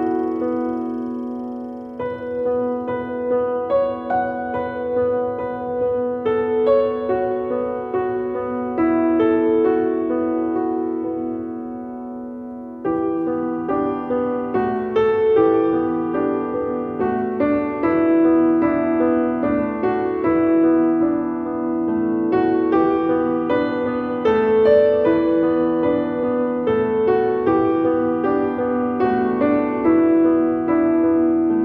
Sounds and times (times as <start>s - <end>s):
Music: 0.0s - 31.6s.